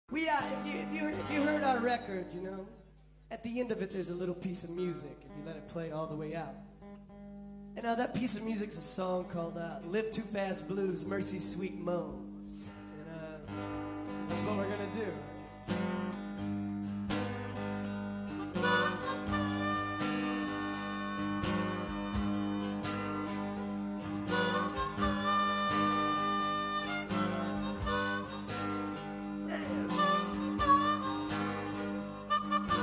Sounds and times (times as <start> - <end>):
Speech: 0.1 - 6.6, 7.8 - 12.2, 13.0 - 13.5, 14.3 - 15.3
Music: 0.1 - 32.8
Inside, large room or hall: 8.3 - 32.8.